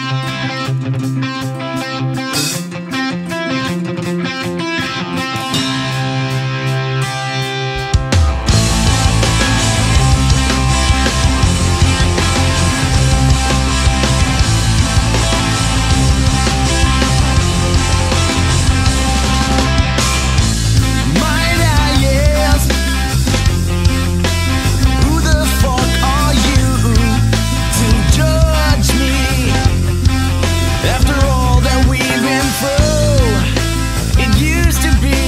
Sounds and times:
Music: 0.0 - 35.2.

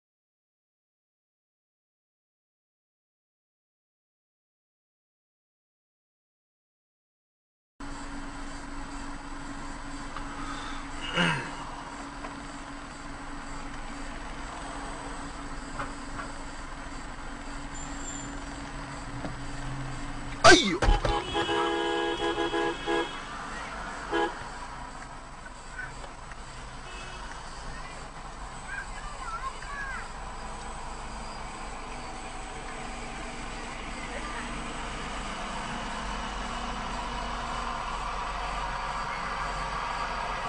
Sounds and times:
Speech: 20.4 - 20.9, 27.7 - 30.1.

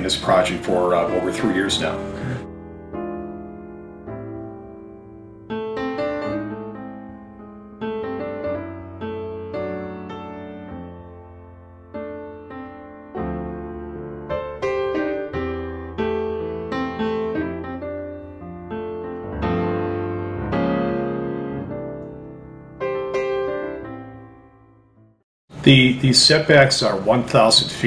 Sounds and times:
Speech: 0.0 - 2.1, 25.6 - 27.8
Music: 0.0 - 25.3.

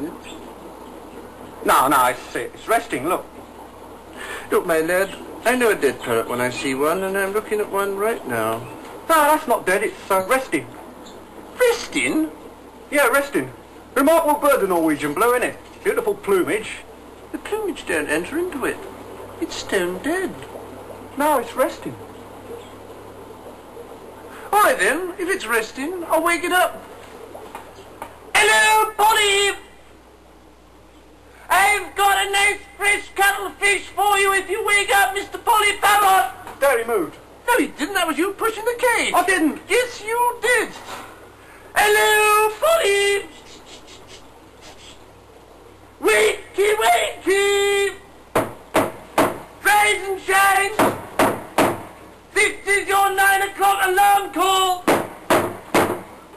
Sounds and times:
Speech: 0.0 - 0.4, 1.6 - 3.3, 4.5 - 10.8, 11.6 - 20.5, 21.2 - 22.0, 24.5 - 26.8, 28.3 - 29.7, 31.5 - 41.0, 41.8 - 44.0, 46.0 - 48.0, 49.6 - 50.8, 52.3 - 54.9.

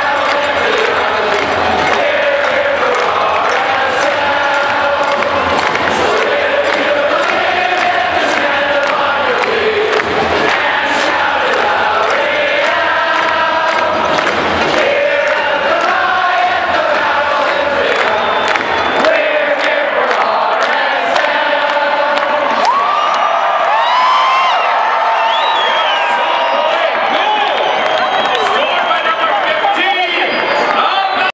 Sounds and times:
Music: 0.0 - 23.6
Speech: 28.3 - 31.3.

